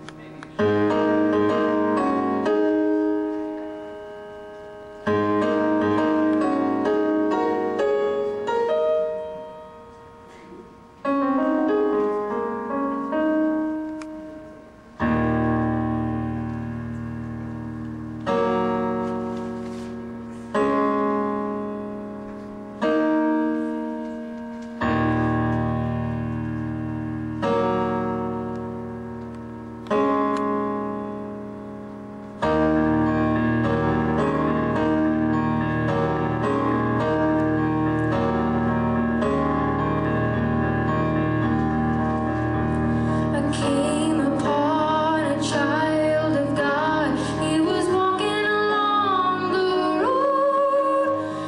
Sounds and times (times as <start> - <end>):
Sad music: 0.0 - 51.4.